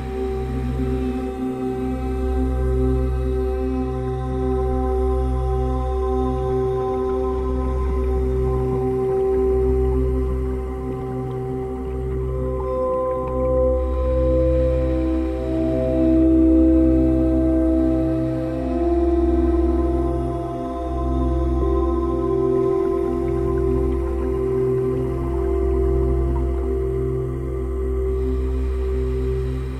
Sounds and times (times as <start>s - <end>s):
Music: 0.0s - 29.7s
Outside, rural or natural: 0.0s - 29.7s.